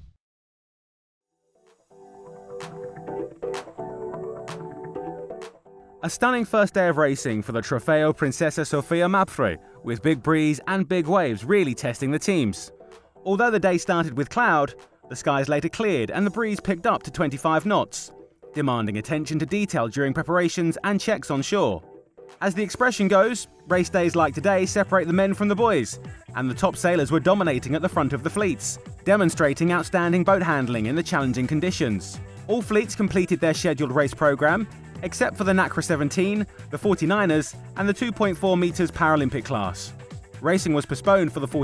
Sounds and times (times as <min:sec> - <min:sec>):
Music: 0:01.3 - 0:41.6
Speech: 0:06.0 - 0:12.7, 0:13.3 - 0:21.8, 0:22.4 - 0:41.6.